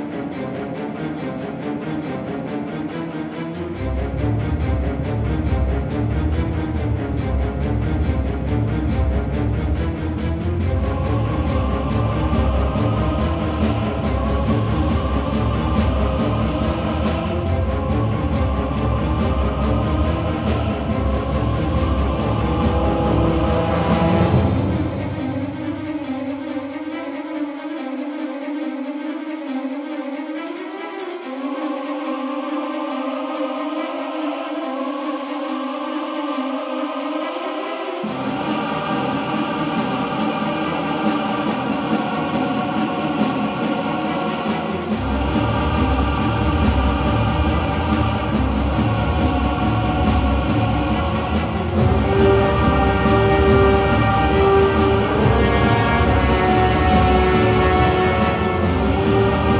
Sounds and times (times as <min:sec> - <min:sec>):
Music: 0:00.0 - 0:59.5.